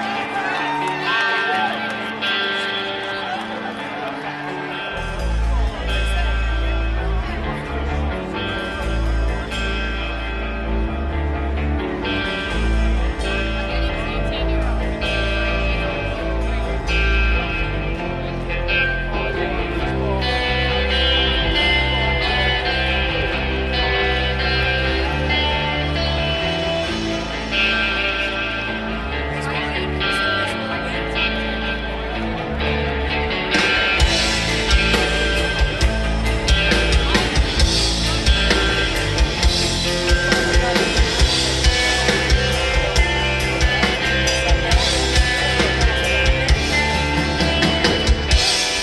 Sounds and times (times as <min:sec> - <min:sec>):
Music: 0:00.0 - 0:48.8
Speech: 0:00.0 - 0:48.8.